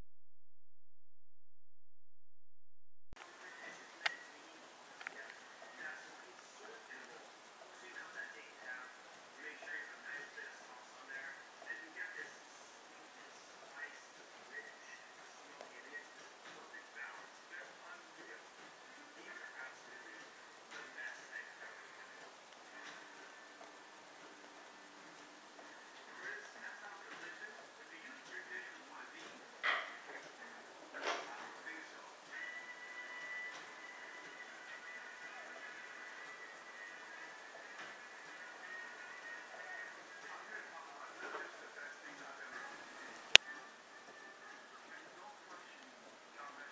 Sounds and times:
Music: 0:03.2 - 0:46.7.

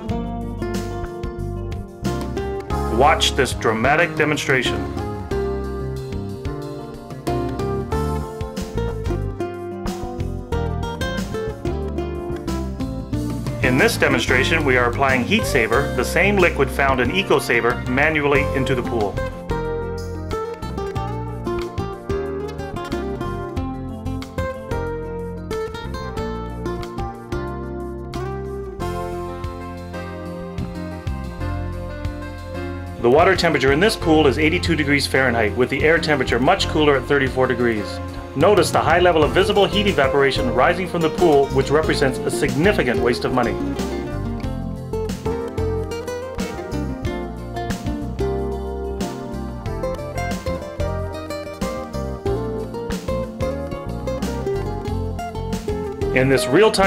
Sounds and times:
Music: 0:00.0 - 0:56.8
Speech: 0:02.9 - 0:05.0, 0:13.6 - 0:19.2, 0:33.0 - 0:43.8, 0:56.1 - 0:56.8.

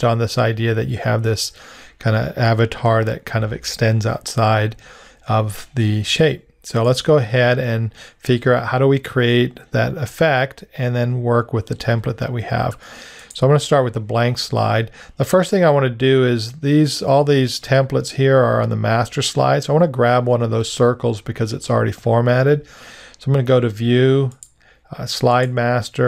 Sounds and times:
Speech: 0:00.0 - 0:26.0.

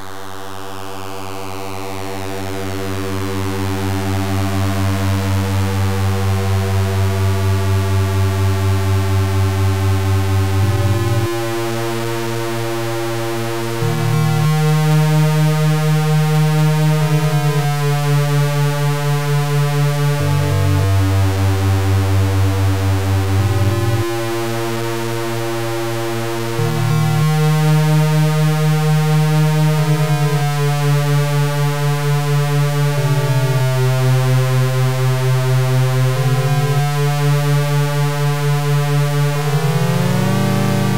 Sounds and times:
Music: 0:00.0 - 0:40.9.

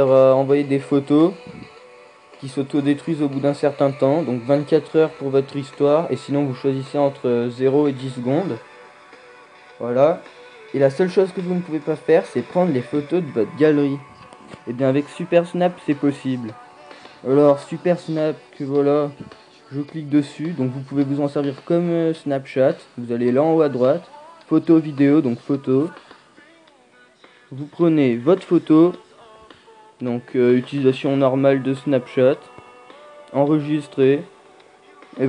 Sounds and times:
Speech: 0:00.0 - 0:01.7, 0:02.4 - 0:08.6, 0:09.8 - 0:16.6, 0:17.2 - 0:26.0, 0:27.5 - 0:29.1, 0:30.0 - 0:32.6, 0:33.3 - 0:34.3
Music: 0:00.0 - 0:35.2.

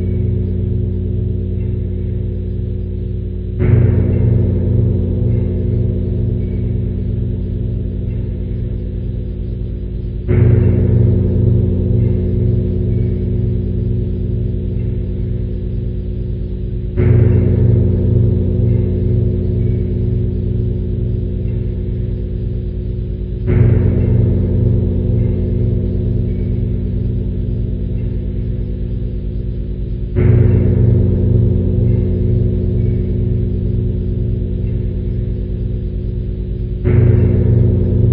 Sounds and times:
Bell: 0:00.0 - 0:38.1.

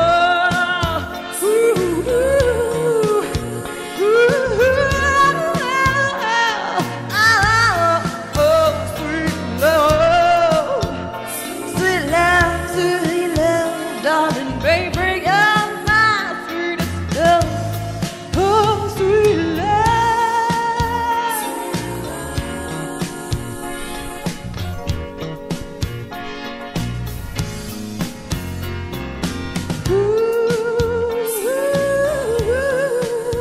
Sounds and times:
Music: 0:00.0 - 0:33.4.

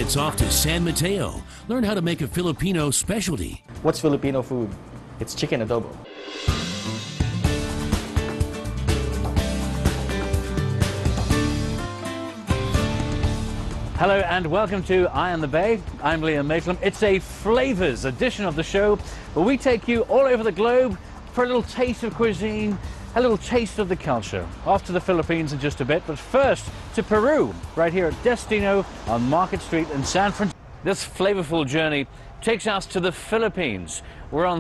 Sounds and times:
Speech: 0:00.0 - 0:06.0, 0:14.0 - 0:34.6
Music: 0:00.0 - 0:30.6.

